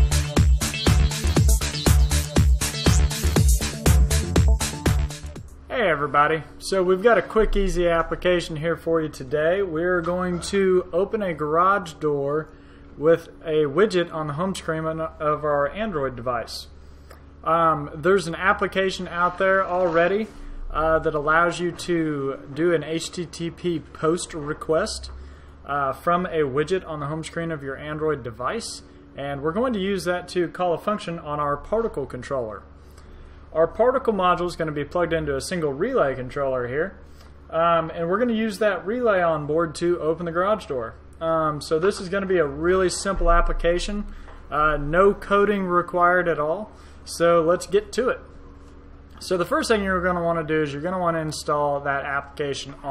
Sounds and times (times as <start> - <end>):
Speech: 5.7 - 16.7, 17.4 - 32.7, 33.5 - 48.3, 49.2 - 52.9.